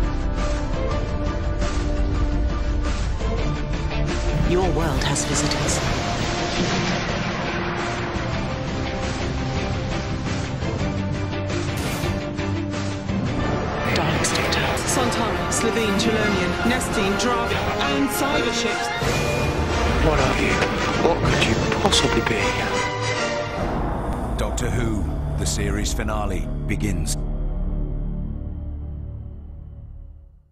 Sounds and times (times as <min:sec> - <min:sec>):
Music: 0:00.0 - 0:30.5
Speech: 0:20.0 - 0:22.8, 0:24.4 - 0:27.2.